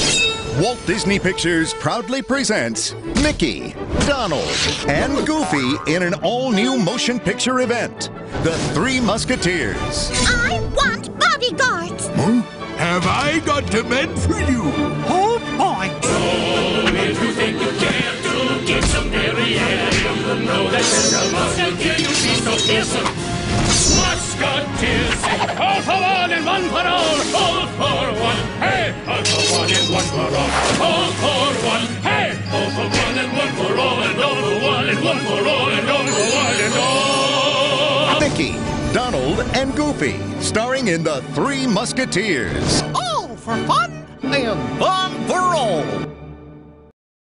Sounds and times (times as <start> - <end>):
Music: 0.0 - 46.9.